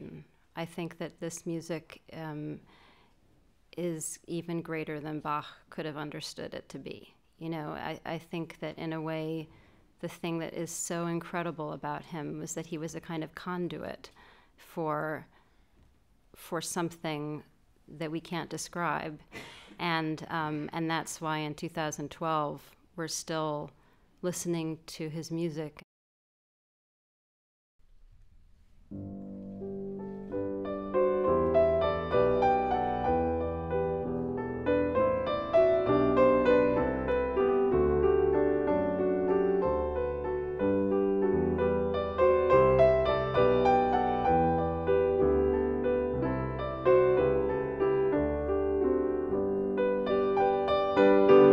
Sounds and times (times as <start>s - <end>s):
Speech: 0.0s - 2.6s, 3.8s - 15.3s, 16.4s - 25.9s.